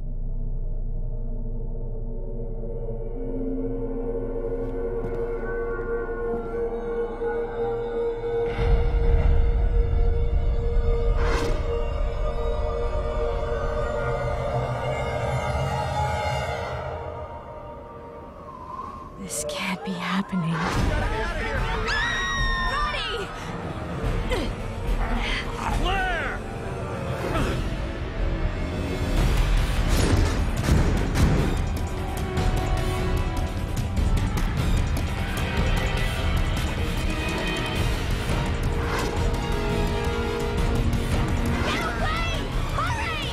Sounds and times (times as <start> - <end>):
Music: 0.0 - 43.3.